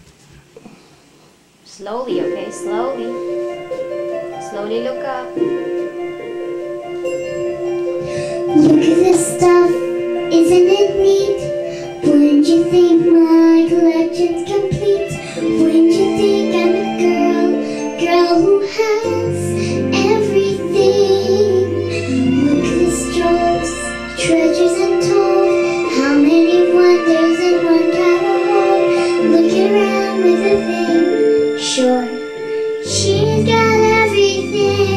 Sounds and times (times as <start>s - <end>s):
Music: 1.0s - 34.9s
Child singing: 8.5s - 34.9s.